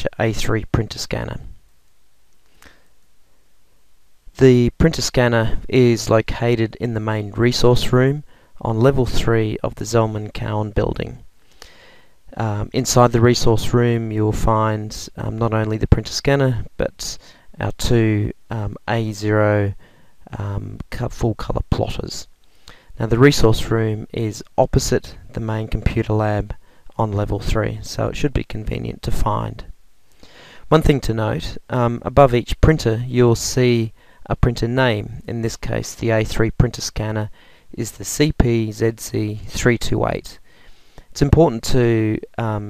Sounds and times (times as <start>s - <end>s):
Speech: 0.0s - 1.6s, 4.4s - 11.3s, 12.3s - 22.3s, 23.0s - 29.8s, 30.7s - 40.4s, 41.2s - 42.6s.